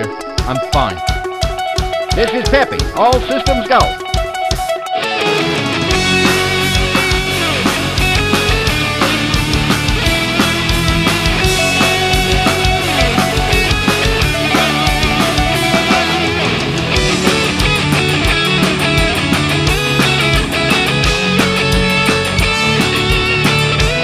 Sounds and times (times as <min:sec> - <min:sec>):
Drum: 0:00.0 - 0:05.0, 0:05.8 - 0:24.0
Drum kit: 0:00.0 - 0:24.0
Electric guitar: 0:00.0 - 0:24.0.